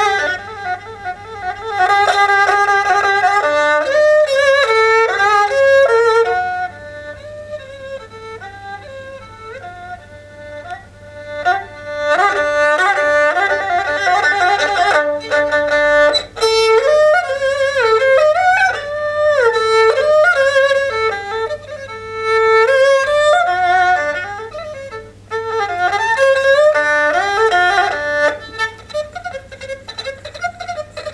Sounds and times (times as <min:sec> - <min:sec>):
Violin, fiddle: 0:00.0 - 0:31.1.